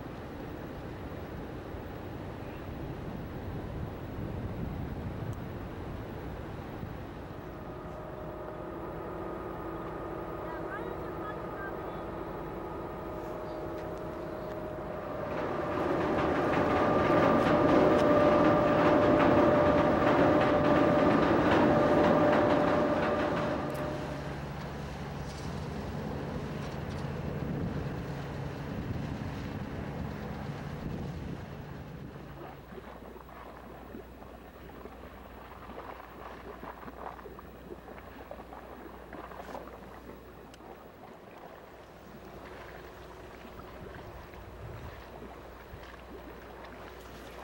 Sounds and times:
Ship: 0.0 - 47.4.

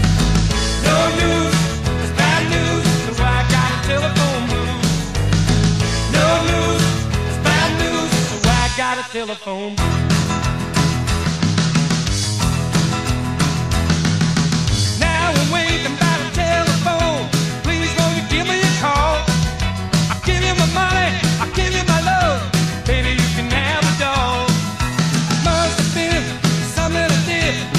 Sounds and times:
Blues: 0.0 - 27.7.

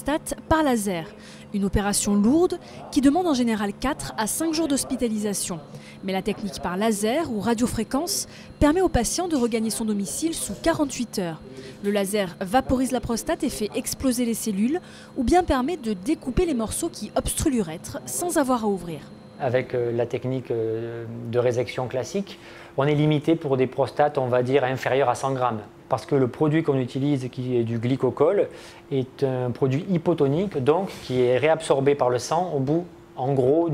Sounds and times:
Speech: 0.0 - 33.7.

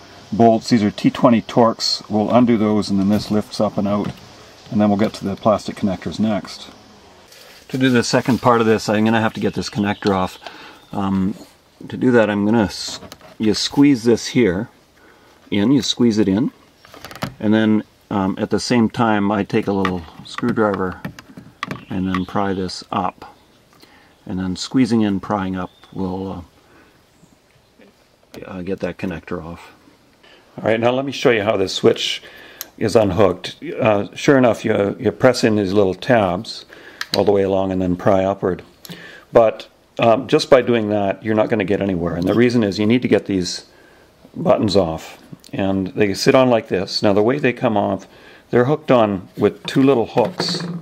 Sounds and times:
Speech: 0.3 - 6.8, 7.7 - 14.8, 15.5 - 16.6, 17.4 - 21.1, 21.9 - 23.4, 24.2 - 26.5, 27.8 - 29.8, 30.6 - 38.7, 39.3 - 43.7, 44.3 - 50.8.

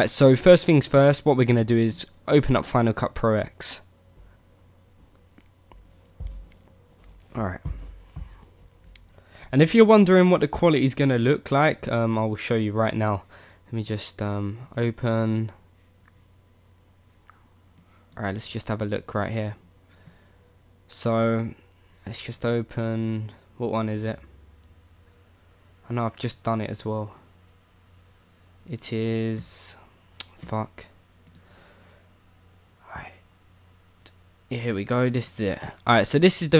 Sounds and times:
Speech: 0.0 - 3.9, 7.3 - 7.8, 9.5 - 15.6, 18.2 - 19.6, 20.9 - 24.3, 25.8 - 27.2, 28.7 - 31.0, 34.5 - 36.5.

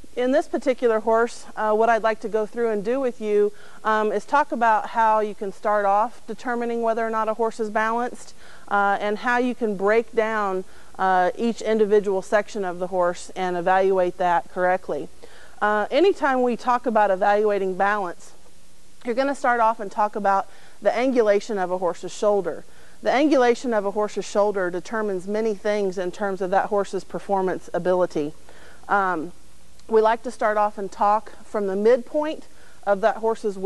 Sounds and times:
Speech: 0.2 - 18.4, 19.0 - 33.6.

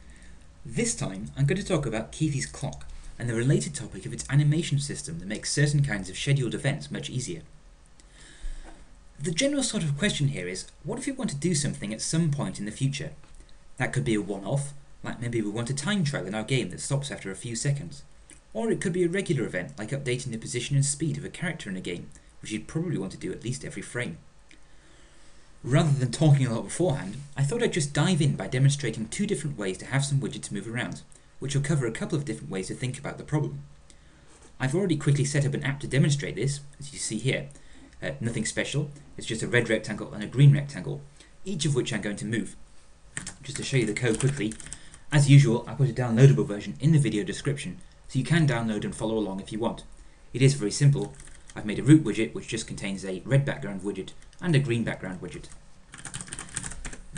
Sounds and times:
Speech: 0.6 - 7.5, 9.2 - 13.2, 13.8 - 24.3, 25.6 - 33.7, 34.6 - 42.6, 43.2 - 55.6.

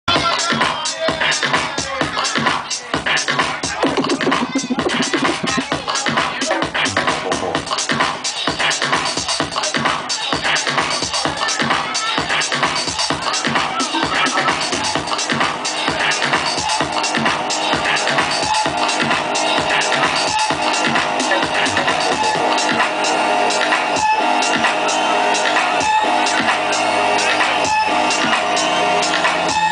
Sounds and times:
Disco: 0.1 - 29.7
Electronic music: 3.6 - 7.9, 12.8 - 29.7.

